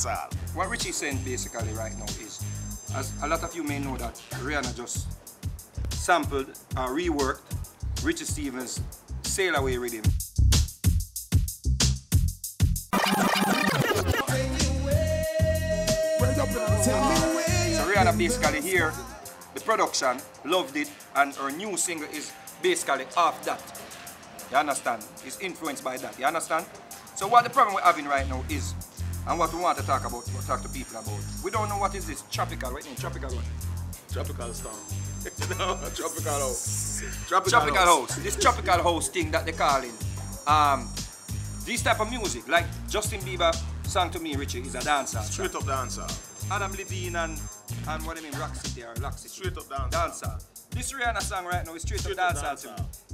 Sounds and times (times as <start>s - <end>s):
Speech: 0.0s - 5.1s, 6.0s - 10.1s, 16.2s - 23.7s, 24.5s - 33.5s, 34.1s - 34.8s, 35.4s - 40.9s, 41.7s - 52.9s
House music: 12.9s - 53.1s.